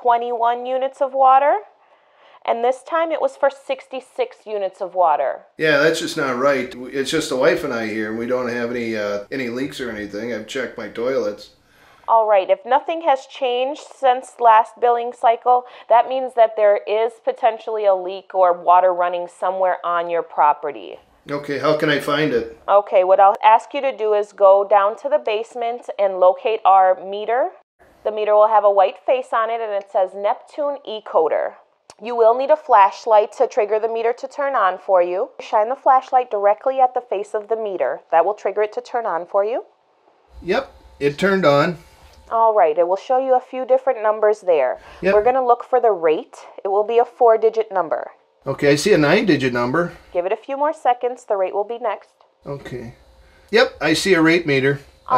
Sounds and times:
Speech: 0:00.0 - 0:01.7, 0:02.4 - 0:11.5, 0:12.1 - 0:39.6, 0:40.4 - 0:52.9, 0:53.6 - 0:55.1.

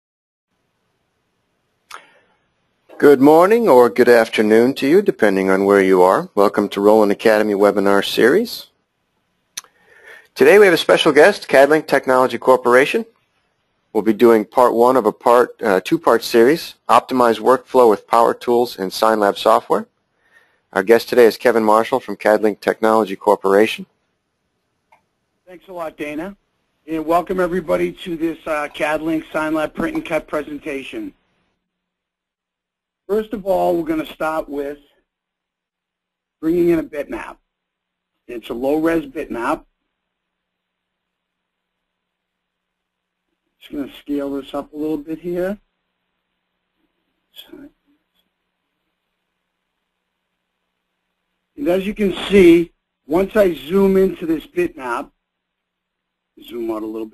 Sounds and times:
Speech: 0:02.9 - 0:08.8, 0:10.4 - 0:13.2, 0:13.9 - 0:19.9, 0:20.7 - 0:23.9, 0:25.5 - 0:31.2, 0:33.1 - 0:34.8, 0:36.4 - 0:37.4, 0:38.2 - 0:39.7, 0:43.6 - 0:45.7, 0:47.4 - 0:47.8, 0:51.5 - 0:55.2, 0:56.4 - 0:57.1.

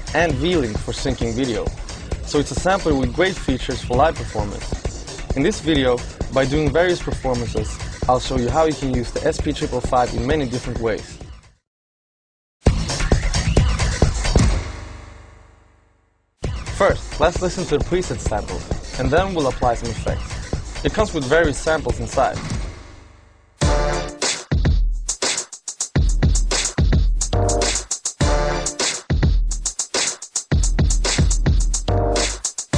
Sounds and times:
Speech: 0:00.1 - 0:04.7, 0:05.4 - 0:11.2, 0:16.8 - 0:22.4.

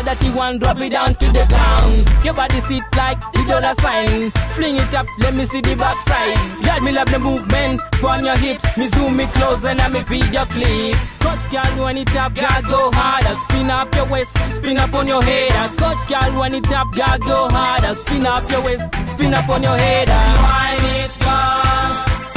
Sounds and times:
Music: 0:00.0 - 0:22.3.

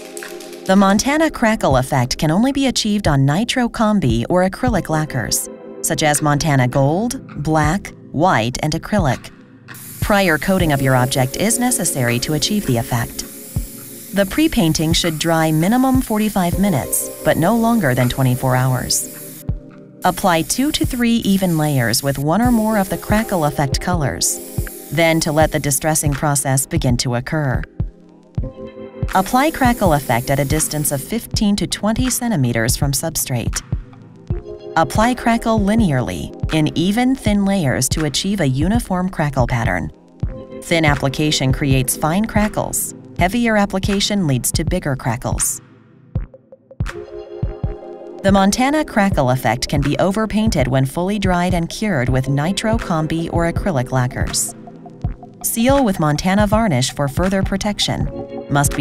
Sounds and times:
Music: 0:00.0 - 0:58.8
Speech: 0:00.7 - 0:09.3, 0:10.0 - 0:13.2, 0:14.2 - 0:19.1, 0:20.0 - 0:27.7, 0:29.1 - 0:33.6, 0:34.8 - 0:39.9, 0:40.6 - 0:45.6, 0:48.2 - 0:54.5, 0:55.4 - 0:58.8.

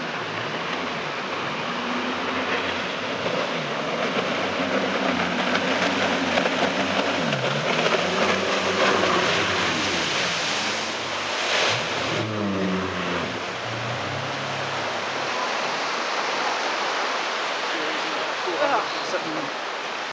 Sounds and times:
Motorboat, speedboat: 0:00.0 - 0:20.1
Speech: 0:17.7 - 0:19.6.

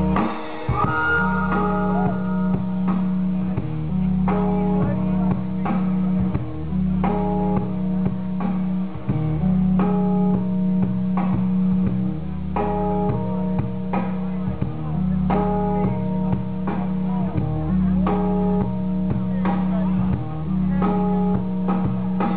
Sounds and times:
Inside, large room or hall: 0:00.0 - 0:22.3
Inside, public space: 0:00.0 - 0:22.3
Music: 0:00.0 - 0:22.3
Speech: 0:00.9 - 0:10.4, 0:11.9 - 0:22.3.

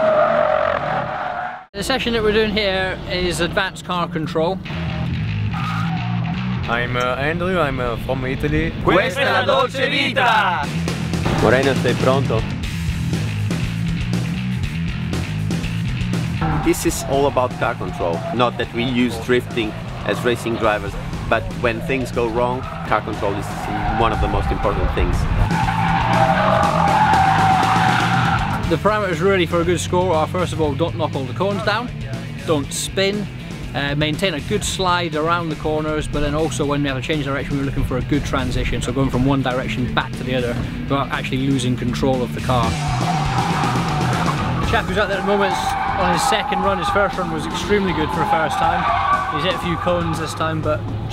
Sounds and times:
Speech: 0:01.8 - 0:04.6, 0:06.7 - 0:10.7, 0:11.4 - 0:12.5, 0:16.5 - 0:25.3, 0:28.7 - 0:42.8, 0:44.7 - 0:50.8
Music: 0:01.8 - 0:51.1.

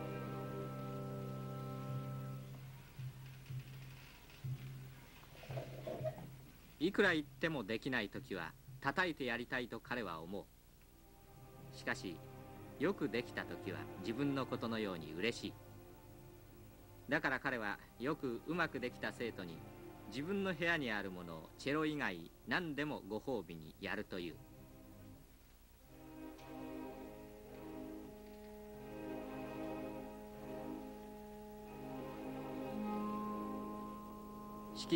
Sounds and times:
Music: 0:00.0 - 0:10.0, 0:10.7 - 0:34.9.

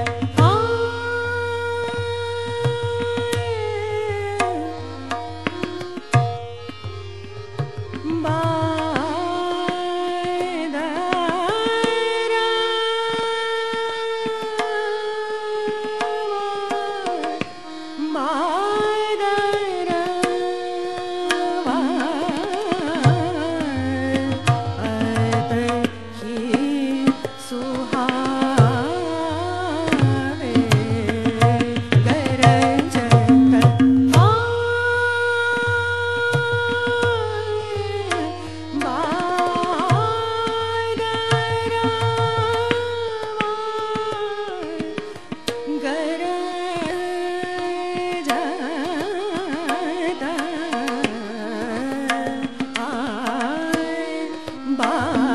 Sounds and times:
Carnatic music: 0:00.0 - 0:55.3.

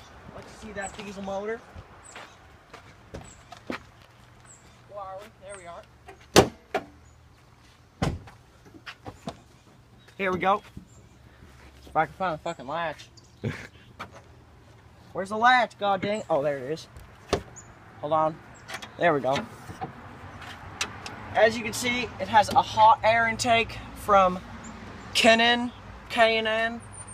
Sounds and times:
Speech: 0:00.4 - 0:01.7, 0:04.9 - 0:05.9, 0:10.2 - 0:10.7, 0:12.0 - 0:13.1, 0:15.2 - 0:16.9, 0:19.0 - 0:19.5, 0:21.4 - 0:24.4, 0:25.2 - 0:26.8.

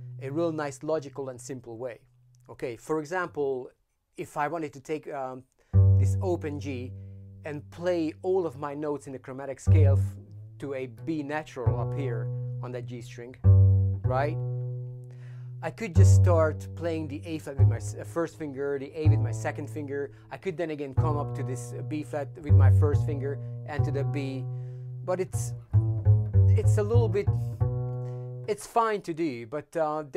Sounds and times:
Double bass: 0:00.0 - 0:01.2, 0:05.7 - 0:28.7
Cello: 0:09.6 - 0:28.5.

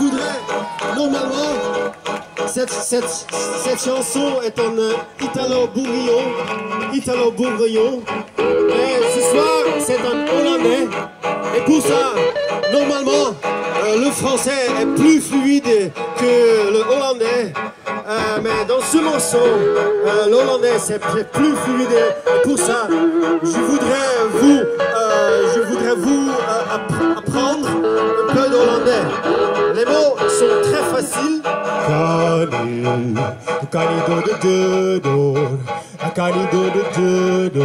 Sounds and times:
Music: 0:00.0 - 0:37.6
Speech: 0:02.5 - 0:08.0, 0:08.7 - 0:31.5.

